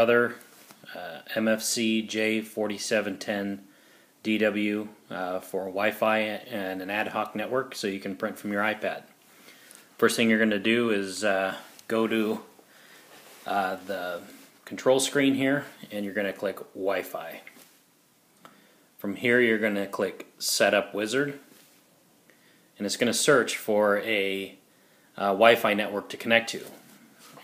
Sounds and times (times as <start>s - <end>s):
Speech: 0.0s - 9.1s, 10.0s - 12.5s, 13.4s - 17.6s, 19.0s - 21.5s, 22.8s - 24.6s, 25.2s - 26.8s.